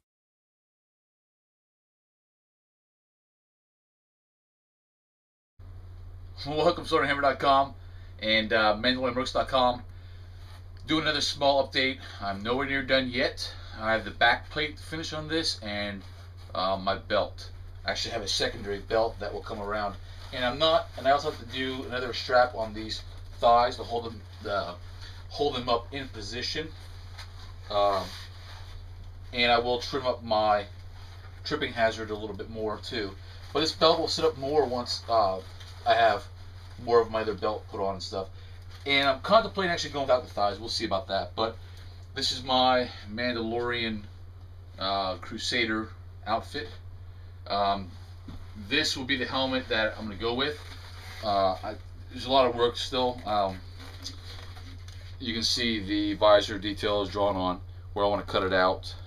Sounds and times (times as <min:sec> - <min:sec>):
Speech: 0:06.4 - 0:09.9, 0:10.8 - 0:26.8, 0:27.7 - 0:28.3, 0:29.3 - 0:30.8, 0:31.4 - 0:41.6, 0:42.2 - 0:44.1, 0:44.8 - 0:46.8, 0:47.5 - 0:48.0, 0:48.6 - 0:54.2, 0:55.2 - 0:59.0.